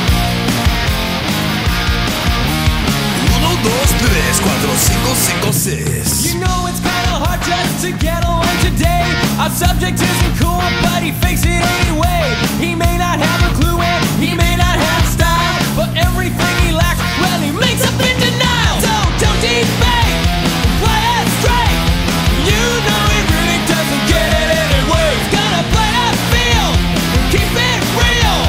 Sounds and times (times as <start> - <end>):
Music: 0.0 - 28.4.